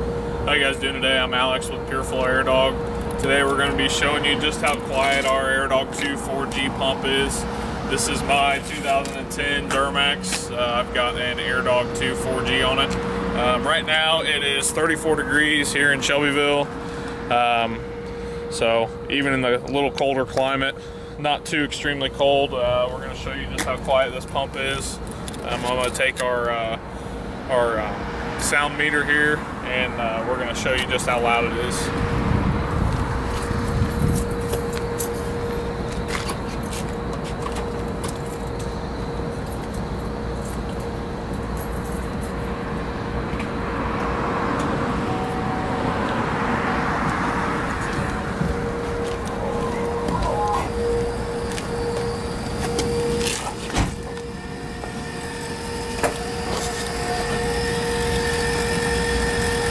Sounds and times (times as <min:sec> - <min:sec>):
Motor vehicle (road): 0:00.0 - 0:59.7
Speech: 0:00.5 - 0:16.7, 0:17.3 - 0:17.8, 0:18.5 - 0:26.8, 0:27.5 - 0:31.9, 0:49.6 - 0:50.8.